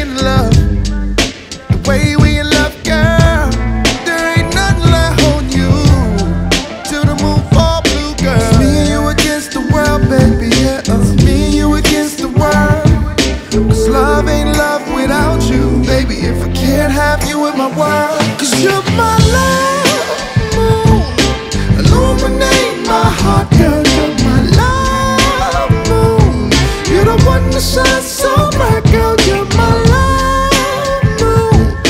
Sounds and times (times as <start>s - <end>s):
Psychedelic rock: 0.0s - 31.9s
Rhythm and blues: 0.0s - 31.9s.